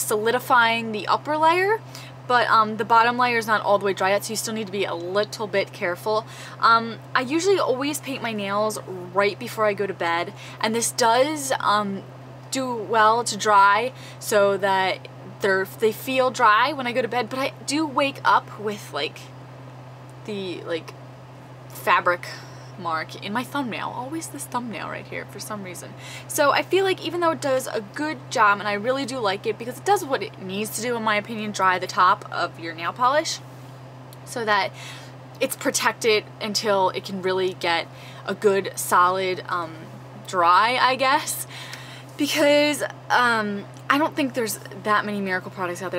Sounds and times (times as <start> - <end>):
Speech: 0.0 - 19.3, 20.2 - 20.9, 21.8 - 33.4, 34.2 - 34.8, 35.4 - 41.5, 42.2 - 45.9.